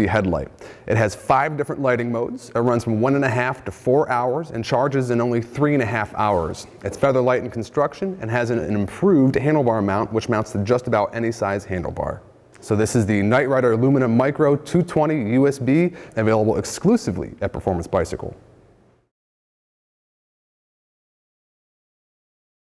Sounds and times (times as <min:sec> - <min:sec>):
Speech: 0:00.0 - 0:18.4.